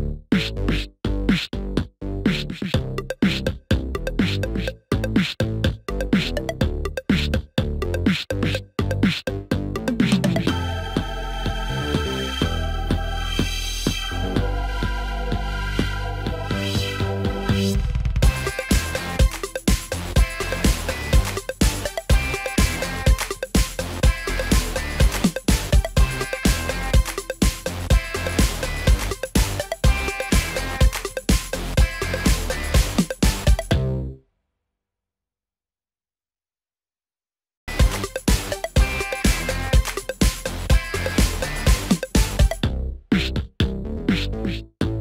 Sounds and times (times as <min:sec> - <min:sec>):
Electronica: 0:02.3 - 0:34.0, 0:37.7 - 0:42.7.